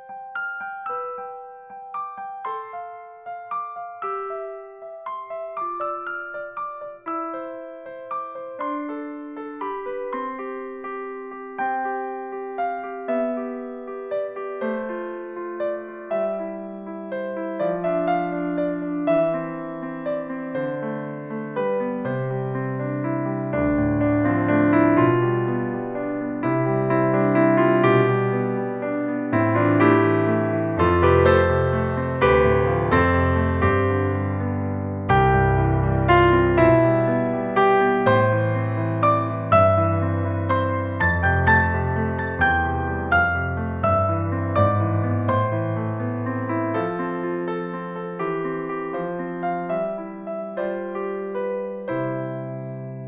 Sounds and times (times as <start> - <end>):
Music: 0.0 - 53.0.